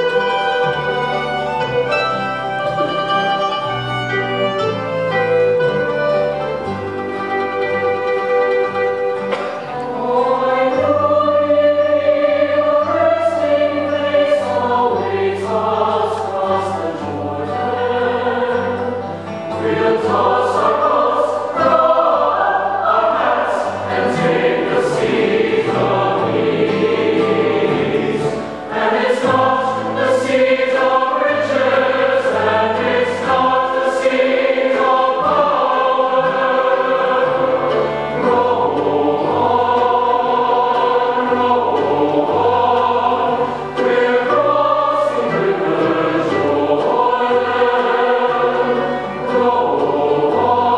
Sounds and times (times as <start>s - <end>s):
Bluegrass: 0.0s - 50.7s
Choir: 0.0s - 50.7s
Classical music: 0.0s - 50.7s
Gospel music: 0.0s - 50.7s.